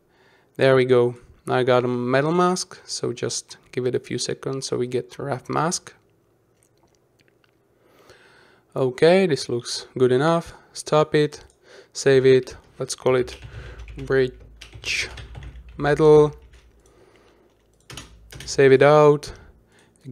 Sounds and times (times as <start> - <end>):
Speech: 0.6 - 6.0, 8.7 - 13.4, 14.0 - 16.4, 18.4 - 20.1.